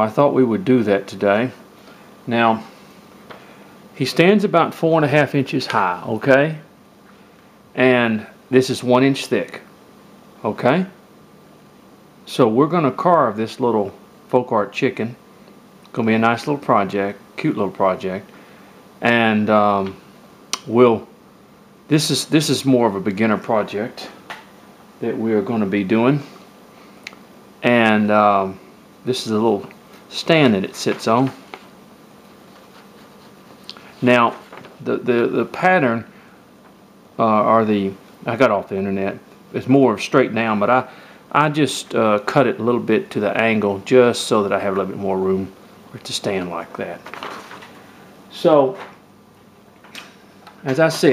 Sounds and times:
Speech: 0.0s - 1.6s, 2.3s - 2.7s, 4.0s - 6.7s, 7.8s - 9.7s, 10.4s - 11.0s, 12.2s - 15.2s, 15.9s - 18.3s, 19.0s - 20.0s, 20.6s - 21.1s, 21.9s - 24.2s, 25.0s - 26.4s, 27.6s - 31.4s, 34.0s - 36.1s, 37.2s - 47.1s, 48.3s - 48.9s, 50.6s - 51.1s.

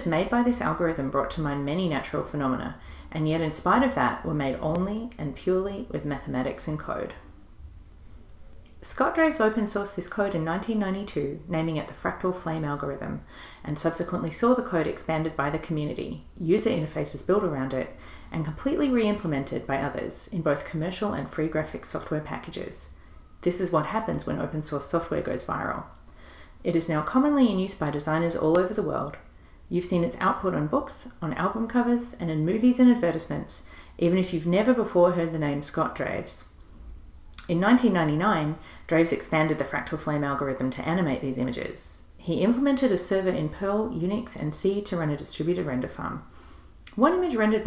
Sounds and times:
Speech: 0.0s - 7.2s, 8.8s - 25.9s, 26.6s - 36.5s, 37.4s - 46.3s, 46.9s - 47.6s.

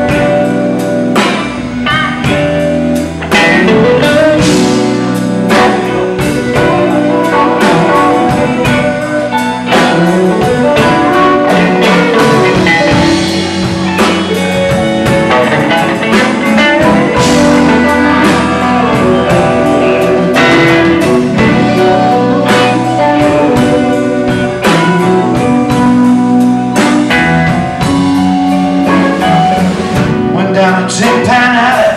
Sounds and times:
Electric guitar: 0.0s - 31.9s.

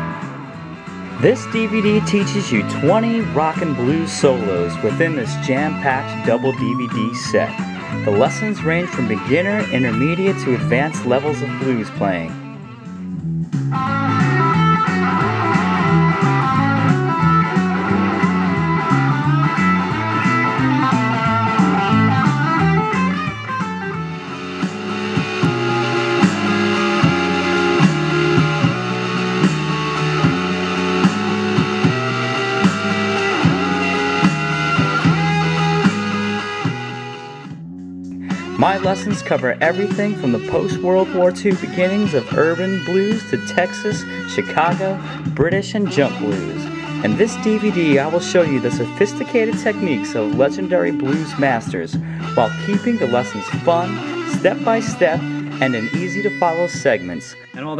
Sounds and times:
Blues: 0.0s - 57.7s
Electric guitar: 0.0s - 57.7s.

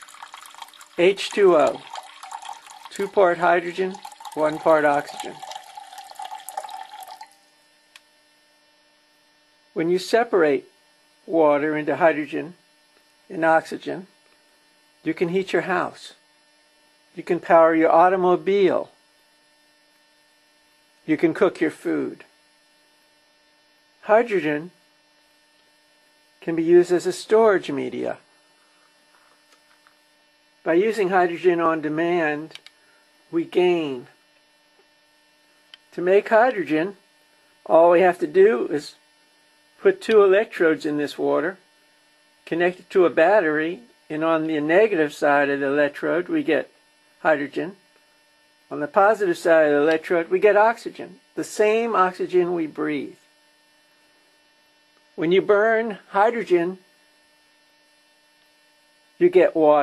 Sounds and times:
Speech: 1.0s - 1.9s, 2.9s - 5.4s, 9.8s - 10.7s, 11.3s - 12.6s, 13.3s - 14.2s, 15.0s - 16.2s, 17.2s - 19.0s, 21.1s - 22.3s, 24.0s - 24.8s, 26.4s - 28.3s, 30.7s - 32.6s, 33.3s - 34.2s, 35.9s - 37.0s, 37.7s - 39.0s, 39.8s - 41.6s, 42.4s - 47.8s, 48.7s - 53.2s, 55.2s - 56.9s, 59.2s - 59.8s.

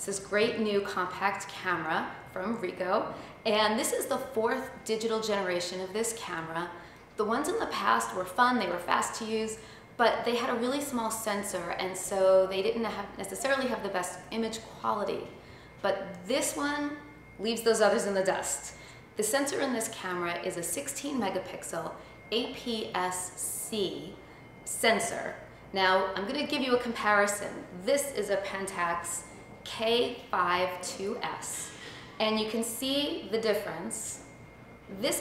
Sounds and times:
Speech: 0.0s - 34.2s, 34.9s - 35.2s.

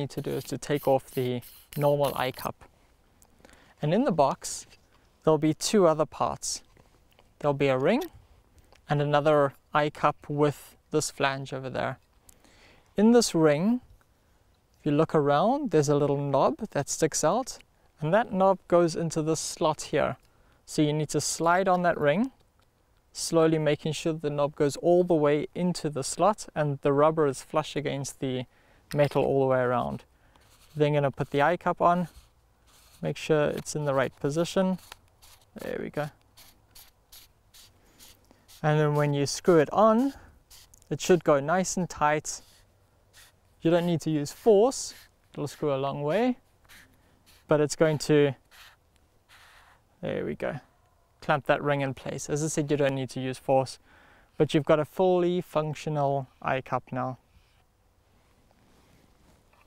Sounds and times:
Speech: 0.0s - 2.6s, 3.8s - 6.7s, 7.4s - 8.1s, 8.9s - 12.0s, 13.0s - 13.8s, 14.8s - 22.4s, 23.2s - 30.1s, 30.8s - 32.1s, 33.0s - 34.8s, 35.6s - 36.2s, 38.6s - 40.2s, 40.9s - 42.4s, 43.6s - 46.4s, 47.5s - 48.4s, 50.0s - 53.8s, 54.4s - 57.2s.

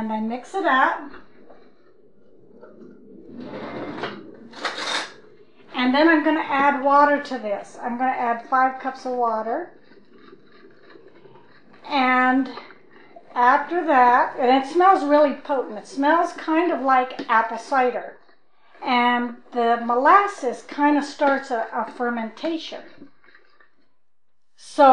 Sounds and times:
Speech: 0.0s - 1.1s, 5.8s - 9.7s, 11.8s - 12.6s, 13.3s - 18.2s, 18.8s - 22.9s, 24.6s - 24.9s.

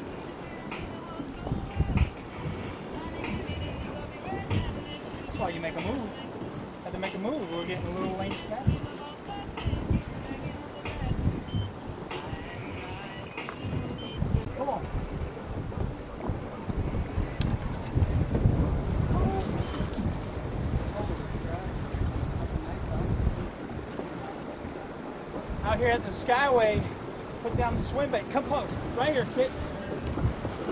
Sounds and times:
Outside, rural or natural: 0.0s - 30.7s.

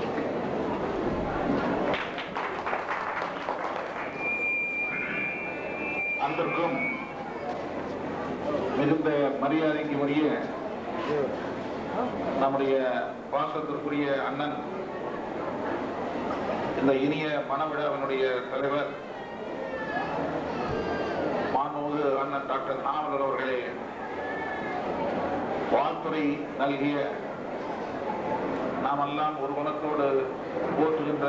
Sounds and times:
Male speech, man speaking: 6.2s - 6.9s, 8.8s - 11.4s, 12.4s - 14.7s, 16.8s - 19.0s, 21.5s - 23.8s, 25.7s - 27.2s, 28.8s - 31.2s.

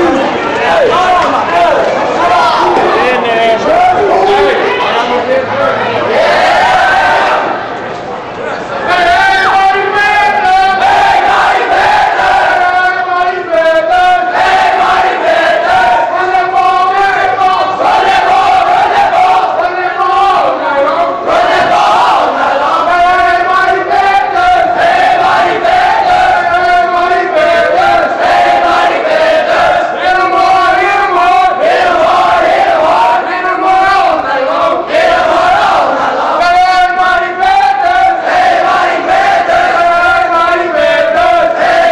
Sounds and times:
Speech: 0.0s - 6.3s, 7.8s - 10.9s, 12.4s - 14.3s, 15.8s - 17.8s, 19.2s - 21.4s, 32.8s - 34.8s, 35.8s - 38.3s.

